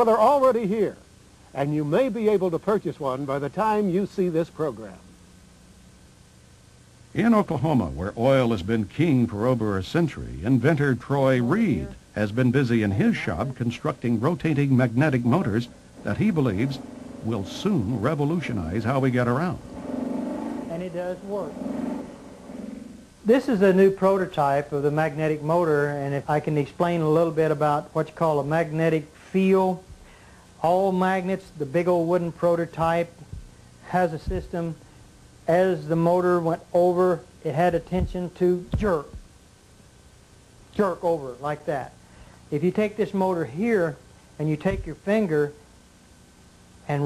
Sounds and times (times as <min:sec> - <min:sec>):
Speech: 0:00.0 - 0:01.0, 0:01.6 - 0:05.1, 0:07.2 - 0:19.6, 0:20.7 - 0:21.6, 0:23.3 - 0:29.8, 0:30.6 - 0:33.2, 0:33.9 - 0:34.8, 0:35.5 - 0:39.2, 0:40.8 - 0:45.6.